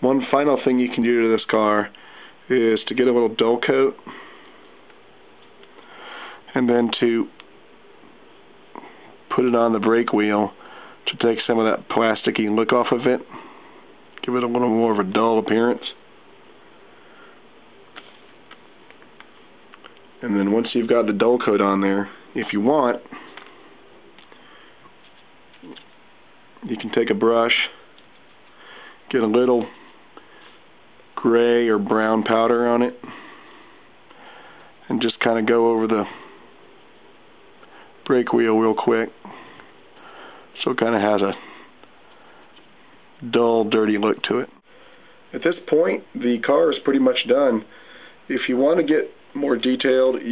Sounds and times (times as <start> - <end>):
Speech: 0.0 - 4.0, 6.5 - 7.4, 9.3 - 13.3, 14.2 - 16.0, 20.2 - 23.1, 26.6 - 27.8, 29.1 - 29.8, 31.2 - 33.0, 34.8 - 36.2, 38.0 - 39.2, 40.6 - 41.4, 43.2 - 44.6, 45.3 - 47.7, 48.3 - 50.3.